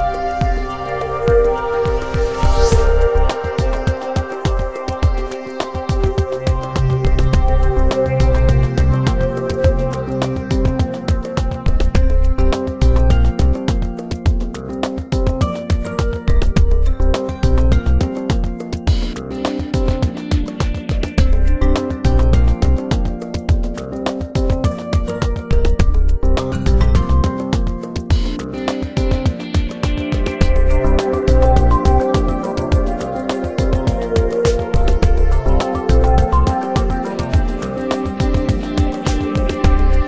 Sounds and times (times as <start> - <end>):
Music: 0.0 - 40.0.